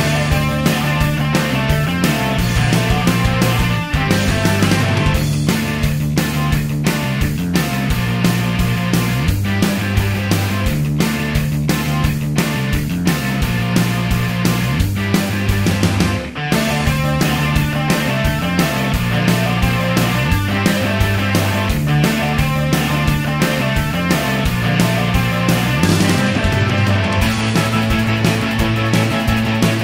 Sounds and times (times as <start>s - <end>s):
Music: 0.0s - 29.8s.